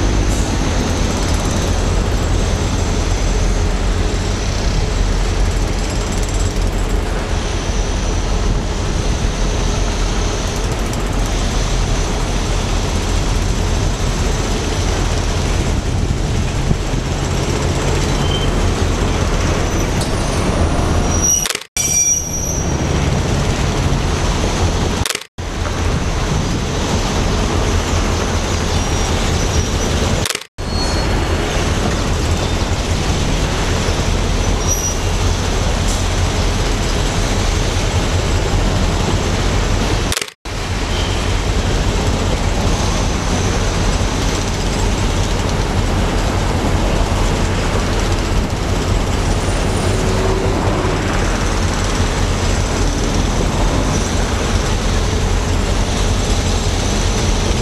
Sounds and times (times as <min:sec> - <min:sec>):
Heavy engine (low frequency): 0:00.0 - 0:57.6
Vehicle: 0:00.0 - 0:57.6.